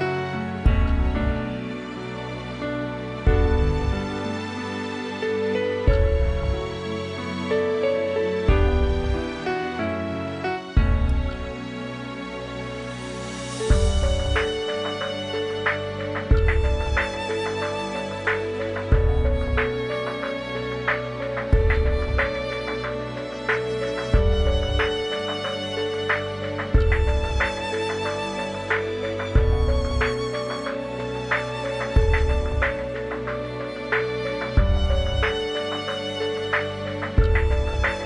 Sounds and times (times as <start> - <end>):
Music: 0.0 - 38.0.